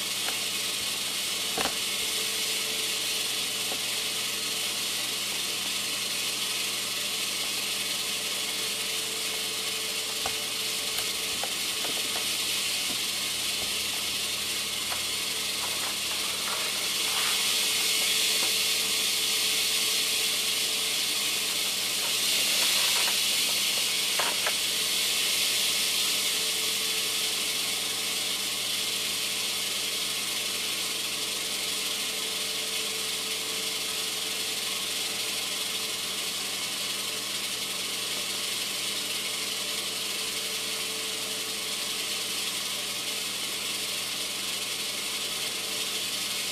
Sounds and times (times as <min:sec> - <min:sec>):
Snake: 0:00.0 - 0:46.5.